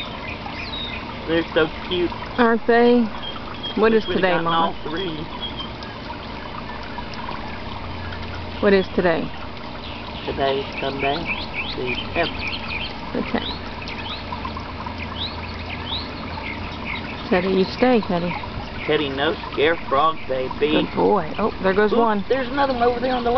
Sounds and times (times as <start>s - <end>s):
Speech: 18.9s - 23.3s.